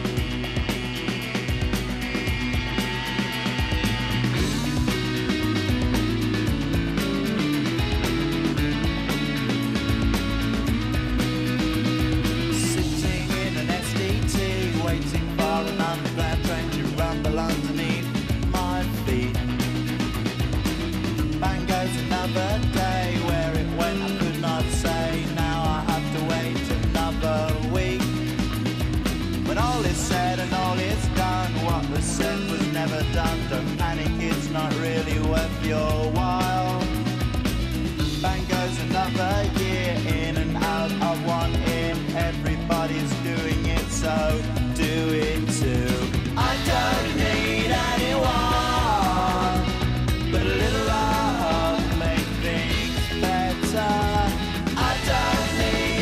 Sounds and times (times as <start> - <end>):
Music: 0.0 - 56.0.